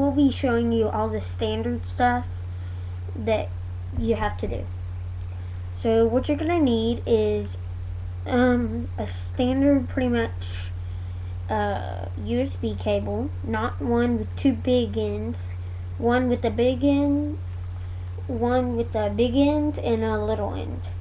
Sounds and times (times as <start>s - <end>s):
Speech: 0.0s - 2.3s, 3.1s - 4.7s, 5.8s - 7.6s, 8.3s - 10.7s, 11.5s - 17.4s, 18.2s - 20.9s.